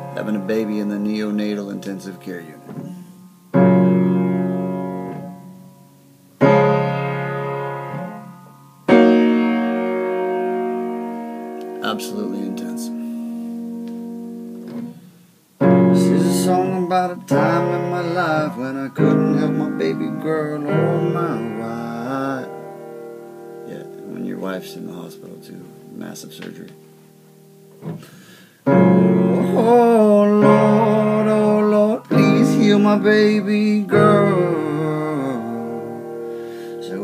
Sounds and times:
Piano: 0:00.0 - 0:37.0.

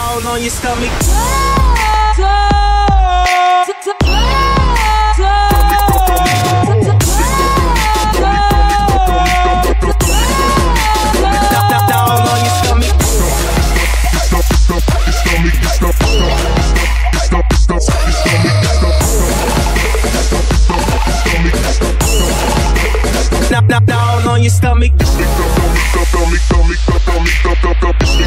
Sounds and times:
Afrobeat: 0:01.0 - 0:28.2.

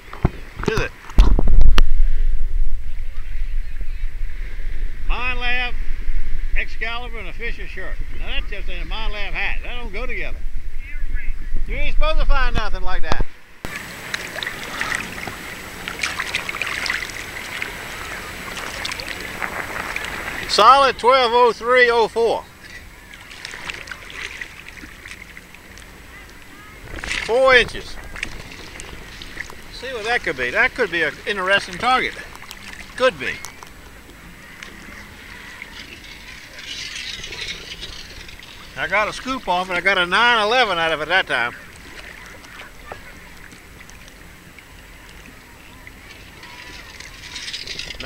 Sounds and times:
Outside, rural or natural: 0:00.0 - 0:48.0.

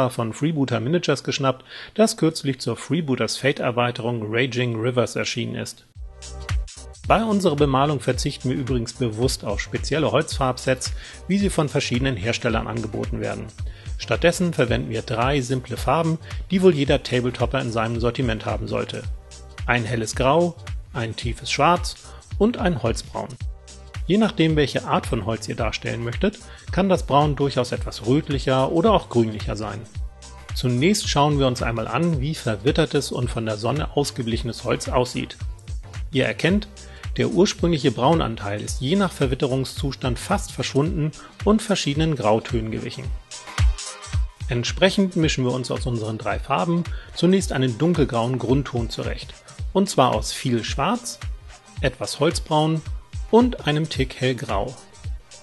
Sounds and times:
Speech: 0:00.0 - 0:05.9, 0:07.1 - 0:19.1, 0:19.7 - 0:23.4, 0:24.1 - 0:30.0, 0:30.6 - 0:35.4, 0:36.1 - 0:43.2, 0:44.5 - 0:54.8
Music: 0:00.0 - 0:55.4.

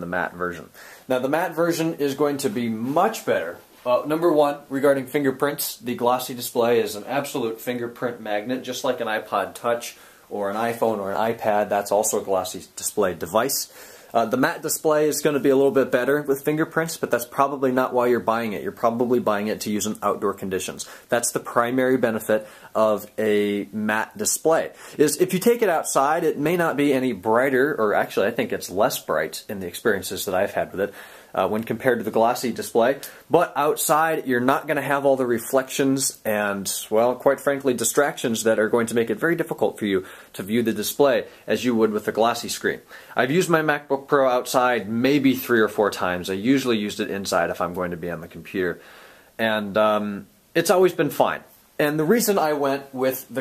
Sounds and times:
Speech: 0:00.0 - 0:48.8, 0:49.4 - 0:53.4.

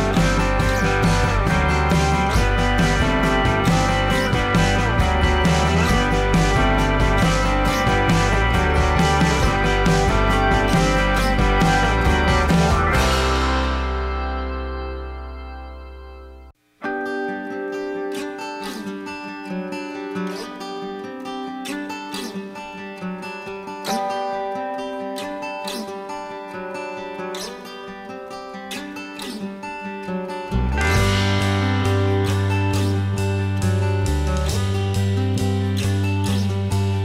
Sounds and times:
Acoustic guitar: 0:00.0 - 0:37.0.

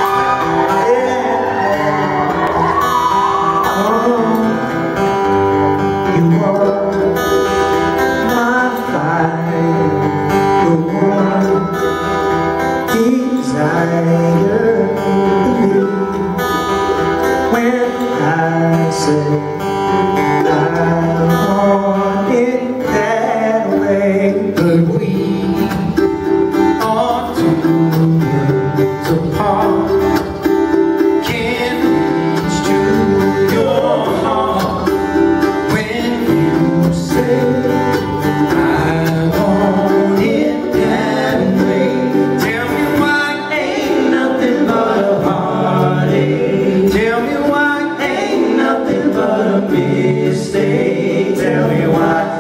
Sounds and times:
Music: 0:00.0 - 0:52.4.

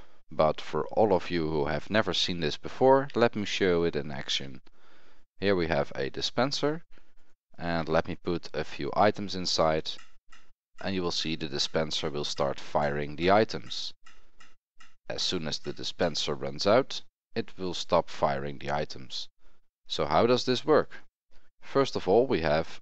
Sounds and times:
Speech: 0:00.4 - 0:04.6, 0:05.4 - 0:06.9, 0:07.6 - 0:10.0, 0:10.8 - 0:14.0, 0:15.1 - 0:19.3, 0:19.9 - 0:22.8.

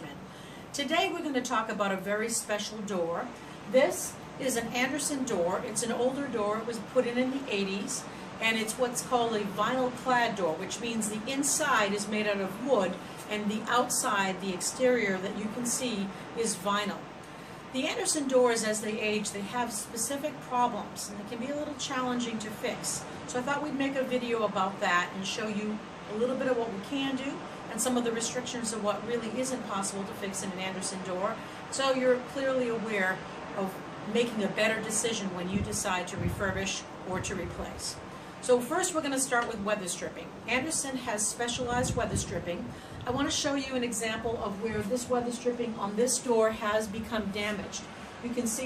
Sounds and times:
Speech: 0:00.0 - 0:00.2, 0:00.8 - 0:17.1, 0:17.7 - 0:48.6.

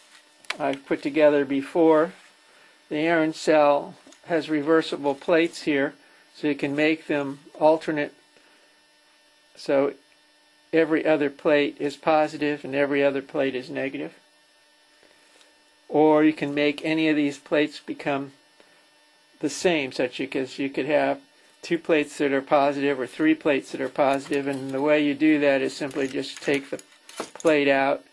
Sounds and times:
Speech: 0:00.5 - 0:02.2, 0:02.9 - 0:08.2, 0:09.6 - 0:10.0, 0:10.7 - 0:14.2, 0:15.9 - 0:18.4, 0:19.4 - 0:26.8, 0:27.4 - 0:28.1.

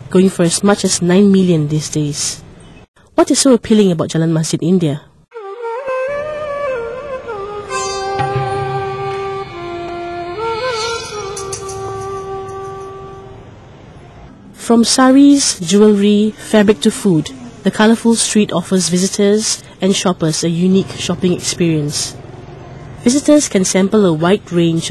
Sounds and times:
Sitar: 0:05.4 - 0:13.4.

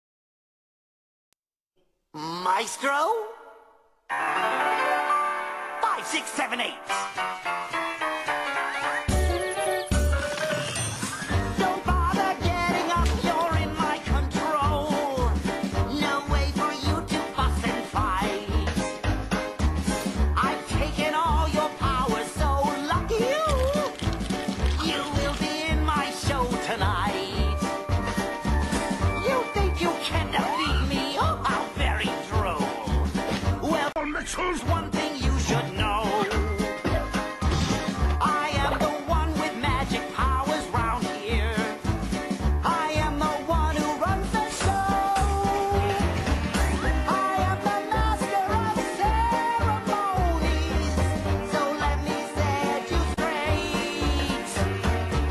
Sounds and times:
Background music: 0:02.2 - 0:55.3.

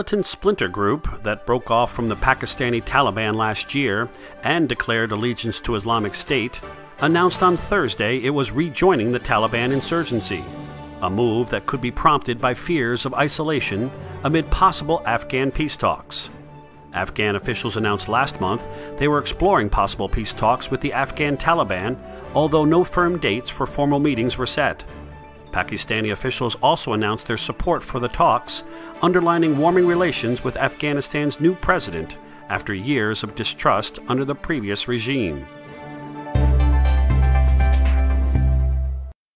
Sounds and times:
Speech: 0:00.0 - 0:16.4, 0:17.0 - 0:24.9, 0:25.6 - 0:35.5
Music: 0:00.0 - 0:39.2.

